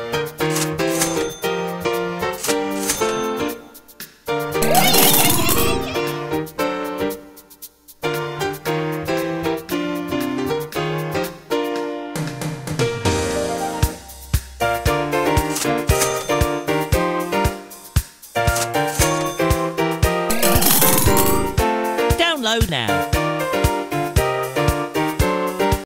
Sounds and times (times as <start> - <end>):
Music: 0.0 - 25.8.